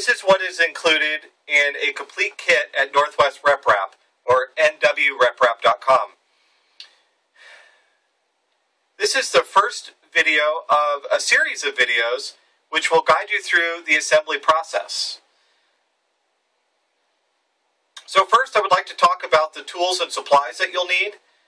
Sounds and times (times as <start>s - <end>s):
Speech: 0.0s - 6.2s, 9.0s - 15.3s, 18.0s - 21.2s.